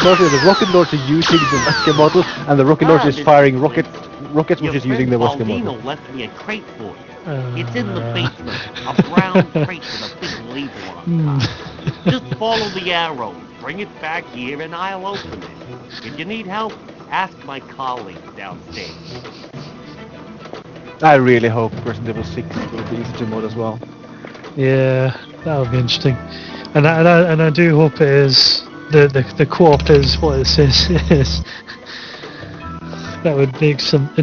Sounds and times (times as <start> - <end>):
Speech: 0.0 - 11.5, 12.1 - 15.4, 16.0 - 19.0, 21.0 - 23.8, 24.6 - 26.2, 26.8 - 31.4, 33.2 - 34.2
Music: 0.0 - 34.2.